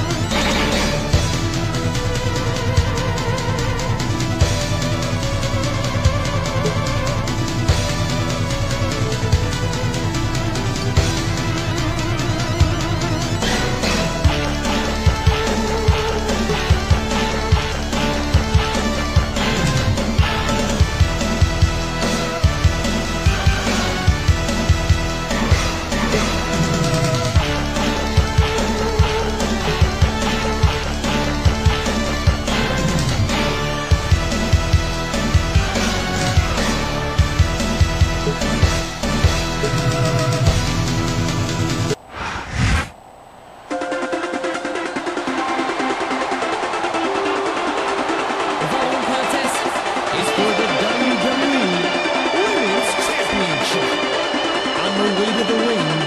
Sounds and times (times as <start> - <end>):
Music: 0.0 - 42.0, 43.7 - 56.0.